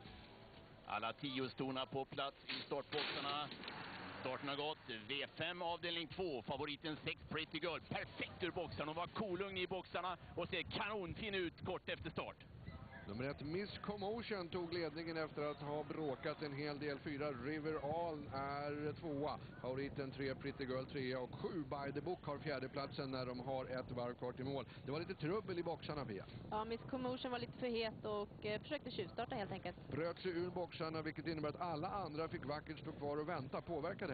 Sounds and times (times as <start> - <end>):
Speech: 0.9 - 3.5, 4.2 - 12.4, 13.0 - 34.1.